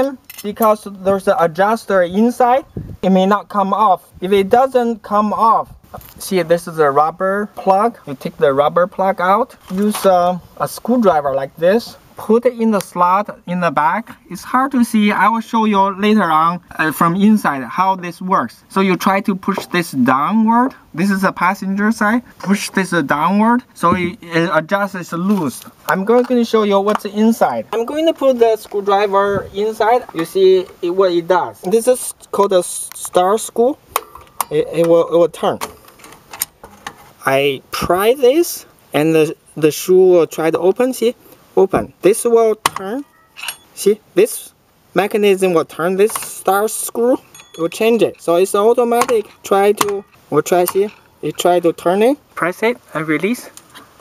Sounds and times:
Speech: 0.0s - 33.8s, 34.5s - 35.7s, 37.2s - 43.1s, 43.8s - 53.6s
Outside, urban or manmade: 0.0s - 54.0s.

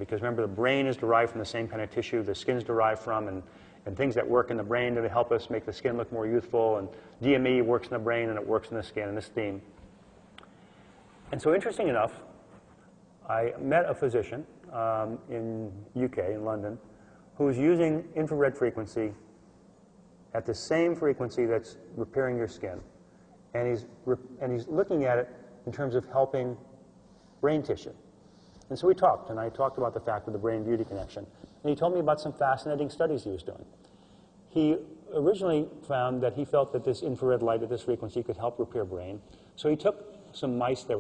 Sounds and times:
Speech: 0.0s - 9.8s, 11.3s - 12.3s, 13.2s - 19.3s, 20.3s - 26.6s, 27.4s - 28.0s, 28.7s - 33.8s, 34.5s - 41.0s.

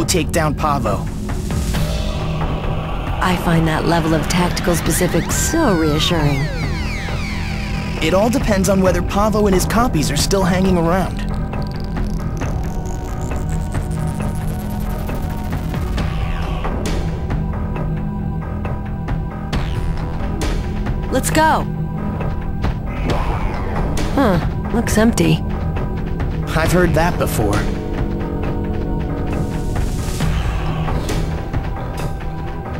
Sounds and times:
Music: 0.0s - 32.7s.

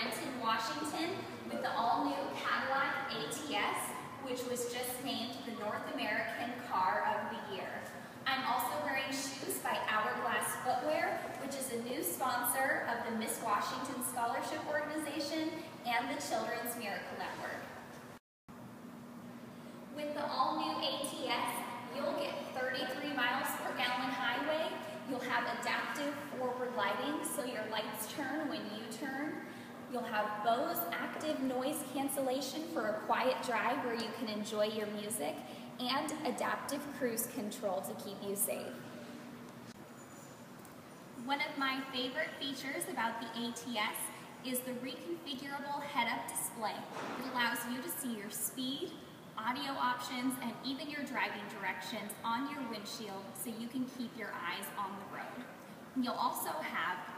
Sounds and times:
Speech: 0.0s - 17.8s, 20.0s - 38.8s, 41.2s - 57.1s.

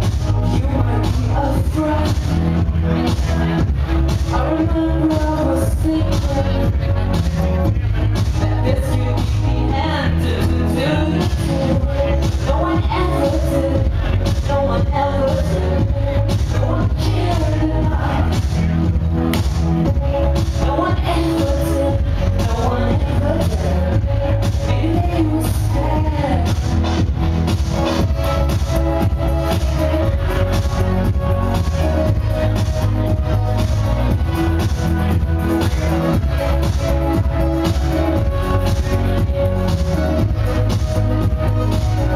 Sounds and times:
Crowd: 0.0s - 42.1s
Inside, large room or hall: 0.0s - 42.1s
Music: 0.0s - 42.1s
Speech: 0.4s - 19.3s.

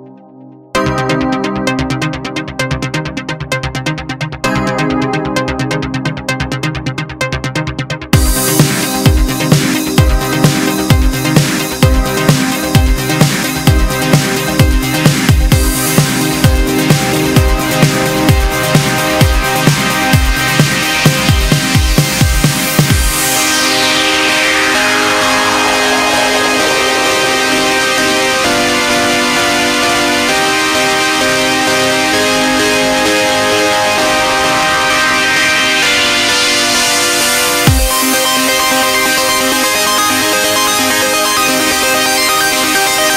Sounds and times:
Music: 0.0s - 43.1s.

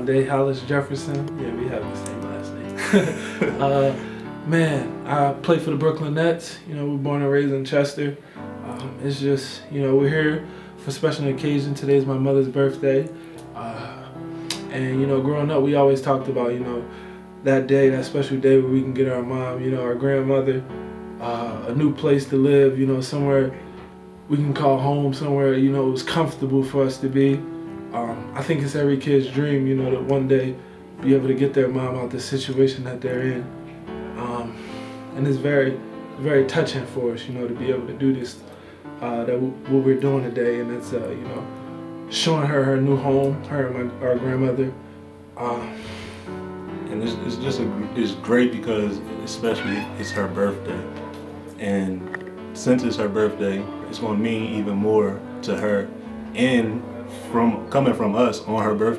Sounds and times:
Speech: 0.0s - 2.8s, 3.5s - 23.6s, 24.3s - 33.5s, 34.2s - 34.6s, 35.2s - 41.5s, 42.1s - 44.8s, 45.4s - 45.8s, 46.9s - 51.0s, 51.6s - 58.9s
Music: 0.0s - 58.9s.

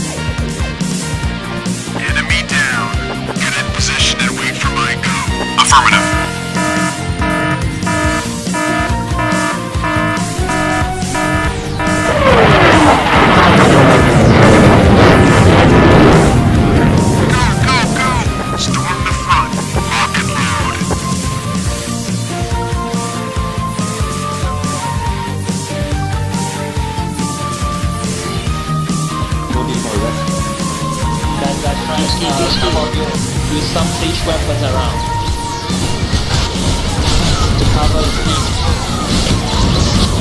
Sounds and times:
Music: 0.0s - 40.2s.

